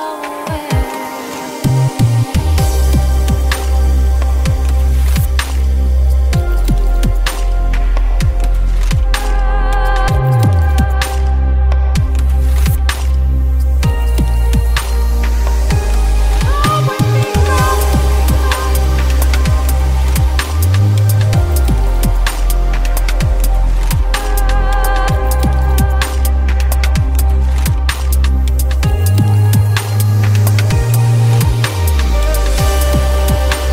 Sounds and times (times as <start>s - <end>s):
Ambient music: 0.0s - 33.7s.